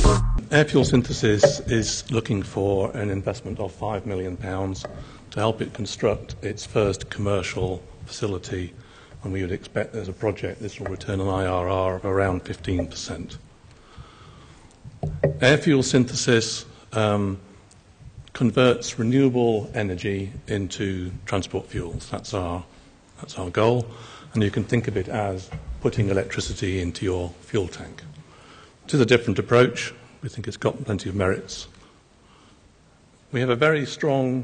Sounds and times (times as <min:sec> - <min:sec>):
Speech: 0:00.0 - 0:13.4, 0:15.4 - 0:17.5, 0:18.3 - 0:28.2, 0:28.9 - 0:31.8, 0:33.3 - 0:34.4.